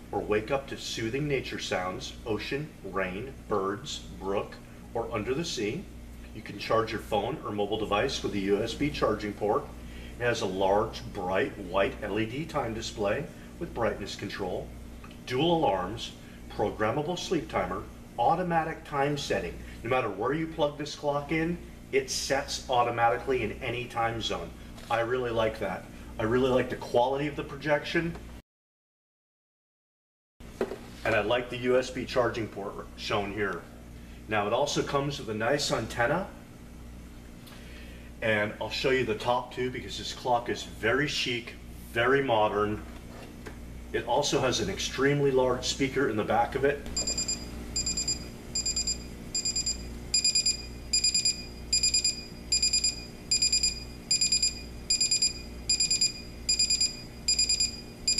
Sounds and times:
Speech: 0.1s - 14.7s, 15.3s - 28.2s, 31.0s - 36.4s, 38.2s - 42.9s, 43.9s - 46.9s.

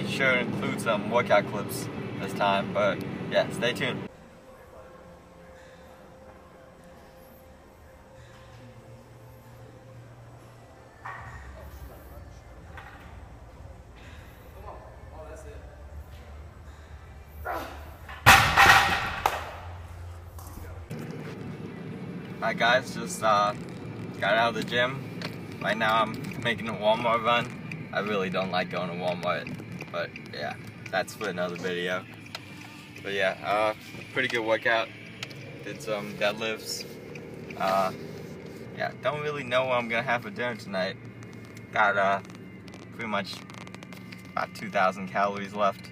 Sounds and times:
Car: 0.0s - 4.1s, 8.3s - 45.9s.

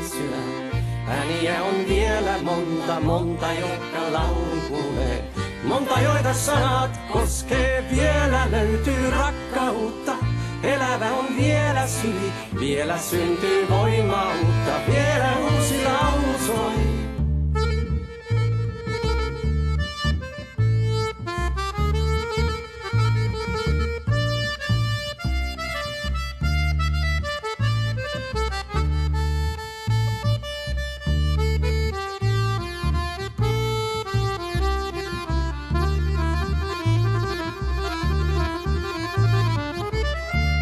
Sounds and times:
Accordion: 0.0s - 40.6s.

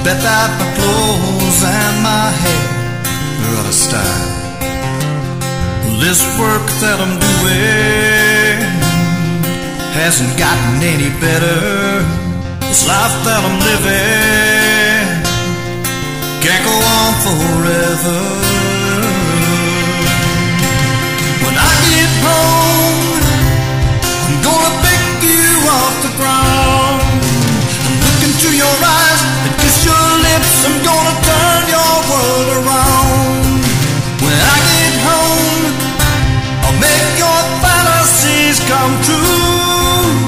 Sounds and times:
Music: 0.0s - 40.2s.

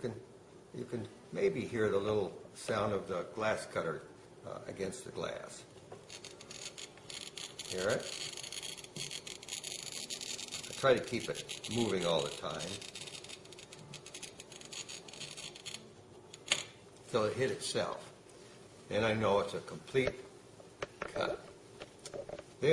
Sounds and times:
Speech: 0.8s - 5.7s, 7.7s - 8.1s, 10.8s - 12.8s, 17.1s - 18.1s, 18.9s - 20.2s.

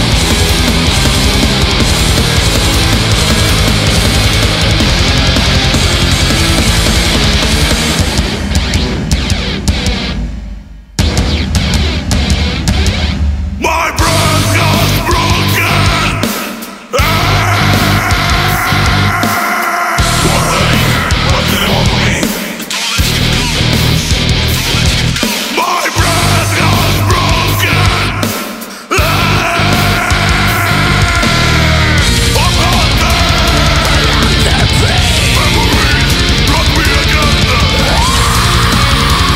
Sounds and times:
Angry music: 0.0s - 39.3s
Heavy metal: 0.0s - 39.3s.

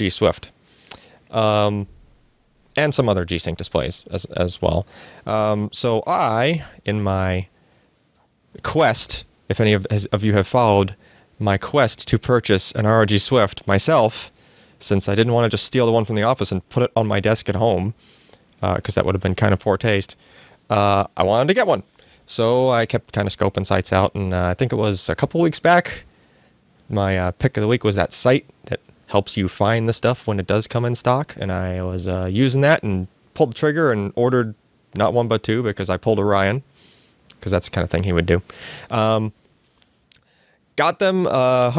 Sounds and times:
Speech: 0.0s - 0.6s, 1.3s - 1.9s, 2.8s - 7.5s, 8.6s - 18.0s, 18.6s - 26.1s, 26.9s - 36.7s, 37.3s - 39.4s, 40.8s - 41.7s.

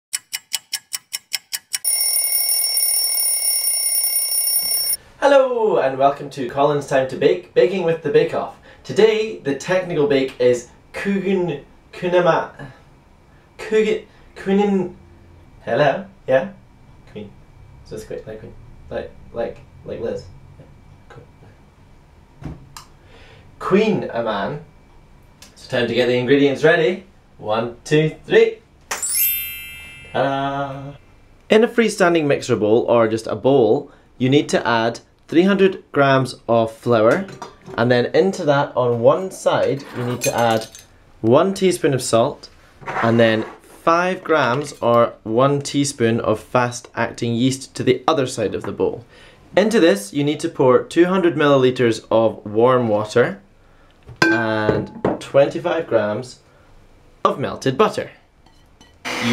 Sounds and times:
Speech: 5.2s - 12.8s, 13.6s - 15.0s, 15.6s - 20.3s, 23.6s - 24.7s, 25.5s - 28.6s, 30.2s - 53.5s, 54.4s - 56.4s, 57.2s - 58.2s.

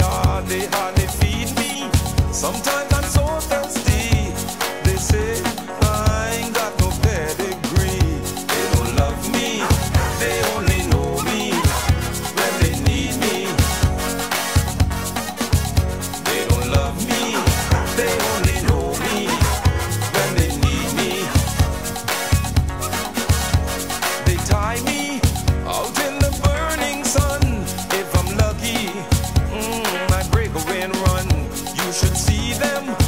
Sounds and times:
Funny music: 0.0s - 33.0s.

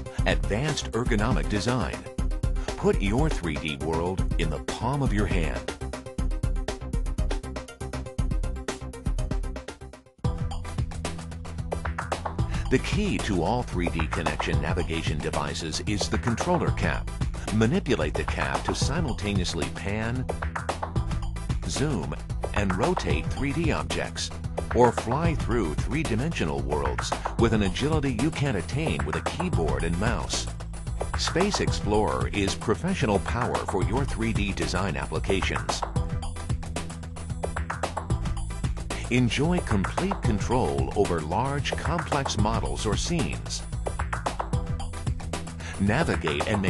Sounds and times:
Music: 0.0s - 46.7s
Speech: 0.2s - 2.1s, 2.8s - 5.7s, 12.7s - 20.2s, 21.6s - 30.5s, 31.2s - 35.8s, 39.0s - 43.6s, 45.7s - 46.7s.

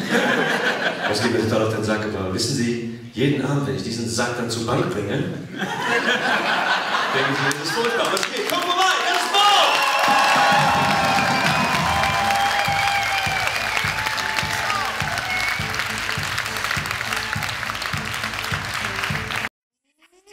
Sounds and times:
Music: 10.1s - 19.5s.

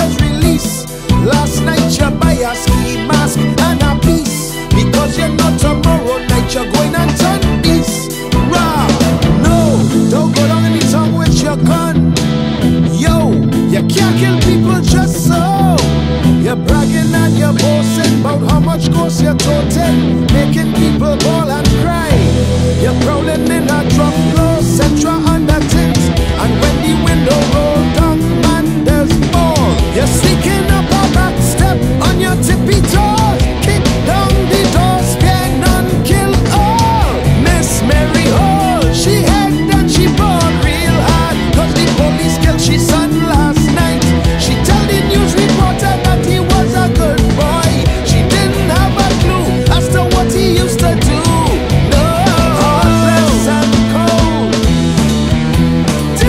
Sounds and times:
Exciting music: 0.0s - 56.2s
Progressive rock: 0.0s - 56.2s.

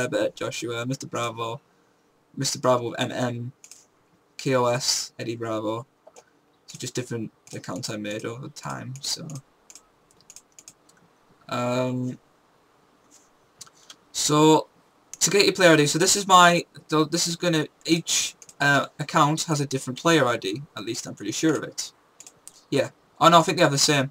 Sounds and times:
Speech: 0.0s - 1.6s, 2.4s - 3.6s, 4.4s - 5.9s, 6.7s - 9.4s, 11.5s - 12.2s, 14.2s - 21.9s, 22.7s - 24.1s.

